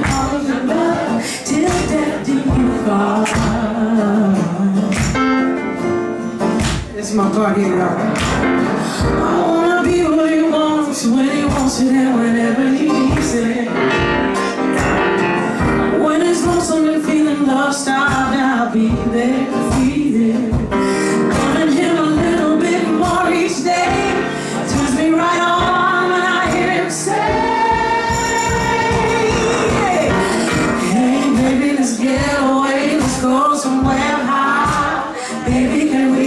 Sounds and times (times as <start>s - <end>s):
Singing: 0.0s - 5.0s, 9.0s - 13.8s, 16.0s - 36.2s
Music: 0.0s - 36.2s.